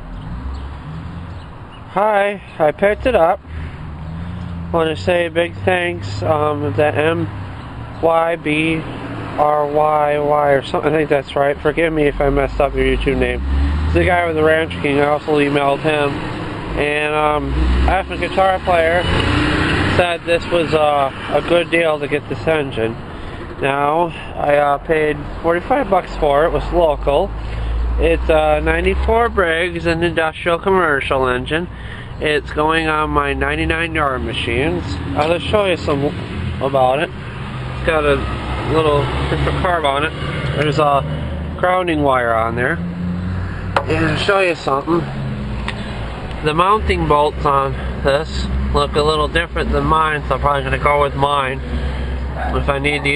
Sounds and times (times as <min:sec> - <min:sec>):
Speech: 0:02.0 - 0:03.4, 0:04.7 - 0:07.3, 0:08.0 - 0:16.2, 0:16.8 - 0:19.1, 0:19.9 - 0:23.0, 0:23.6 - 0:27.3, 0:28.0 - 0:37.2, 0:37.8 - 0:42.8, 0:43.8 - 0:45.1, 0:46.4 - 0:51.6, 0:52.4 - 0:53.1.